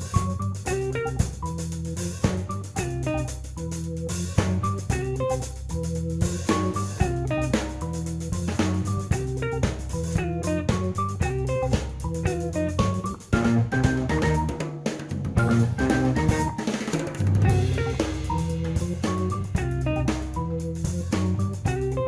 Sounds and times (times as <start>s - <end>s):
Music: 0.0s - 22.0s.